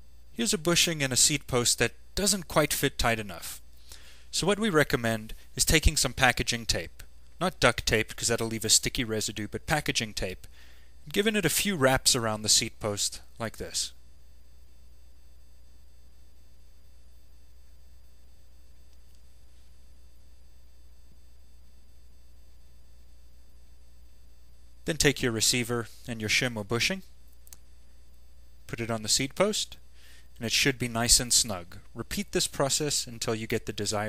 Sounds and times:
Speech: 0.4s - 3.6s, 4.3s - 10.5s, 11.1s - 14.0s, 24.8s - 27.1s, 28.7s - 29.8s, 30.4s - 34.0s.

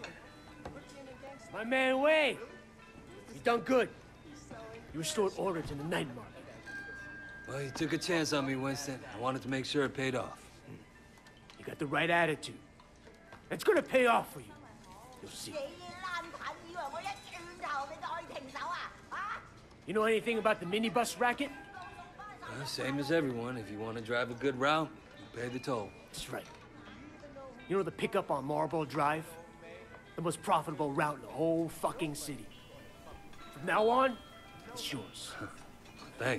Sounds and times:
Music: 0.0s - 36.3s.

